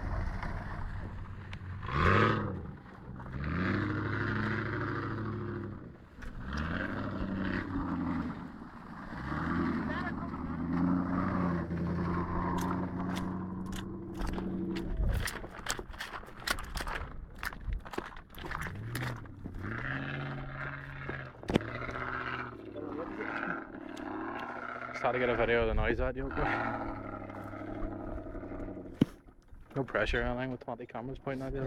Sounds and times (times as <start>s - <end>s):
Car: 0.0s - 31.6s
Outside, rural or natural: 0.0s - 31.6s
Speech: 9.8s - 10.4s, 25.0s - 26.6s, 29.8s - 31.6s.